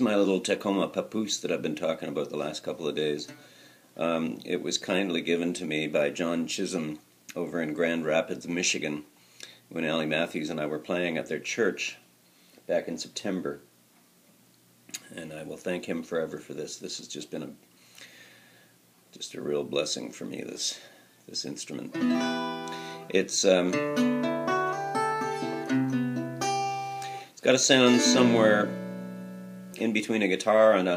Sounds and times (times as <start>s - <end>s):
Speech: 0.0s - 3.3s, 4.0s - 9.1s, 9.7s - 12.0s, 12.7s - 13.7s, 15.0s - 17.6s, 19.1s - 22.0s, 23.1s - 23.8s, 27.4s - 28.7s, 29.8s - 30.9s
Acoustic guitar: 21.9s - 30.9s
Strum: 23.7s - 30.2s.